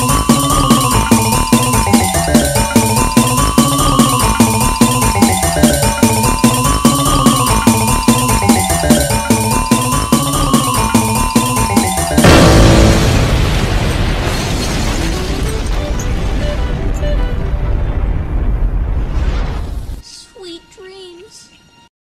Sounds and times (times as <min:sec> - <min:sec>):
Music: 0:00.0 - 0:13.6, 0:14.9 - 0:18.4, 0:20.0 - 0:21.9
Speech: 0:20.0 - 0:21.7.